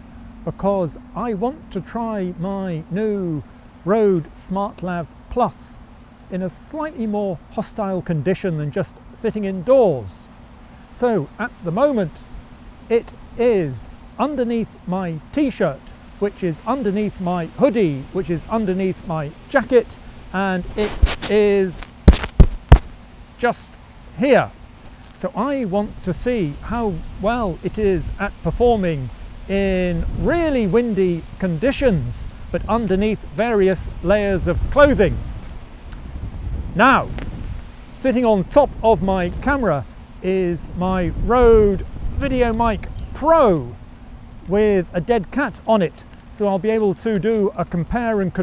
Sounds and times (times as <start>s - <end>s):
Speech: 0.5s - 10.3s, 11.0s - 12.2s, 12.9s - 21.8s, 23.4s - 24.6s, 25.2s - 35.2s, 36.8s - 37.1s, 38.0s - 43.8s, 44.5s - 48.4s.